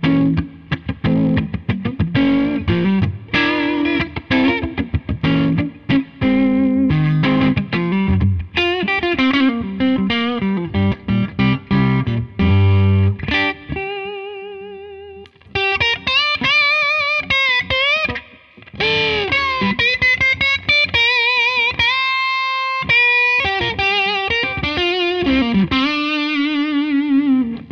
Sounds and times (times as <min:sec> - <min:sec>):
Music: 0:00.0 - 0:27.7.